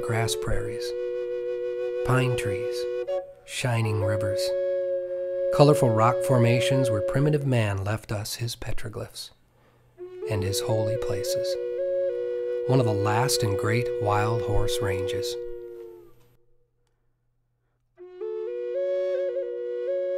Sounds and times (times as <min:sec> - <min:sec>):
Speech: 0:00.0 - 0:01.0, 0:02.0 - 0:02.9, 0:03.5 - 0:04.6, 0:05.6 - 0:09.4, 0:10.3 - 0:11.6, 0:12.7 - 0:15.5
Music: 0:00.0 - 0:07.3, 0:10.0 - 0:16.2, 0:18.0 - 0:20.1.